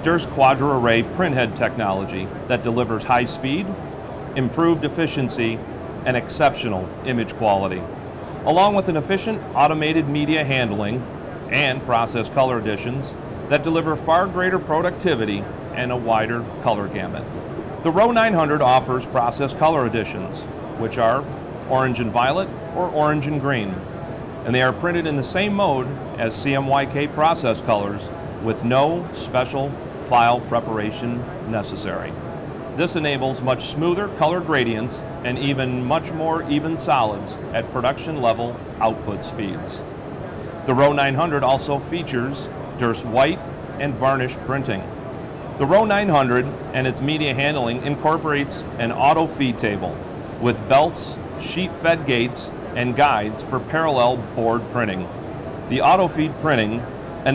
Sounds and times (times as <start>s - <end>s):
Speech: 0.0s - 3.8s, 4.4s - 23.9s, 24.5s - 32.2s, 32.8s - 39.9s, 40.7s - 44.9s, 45.6s - 55.1s, 55.7s - 57.3s.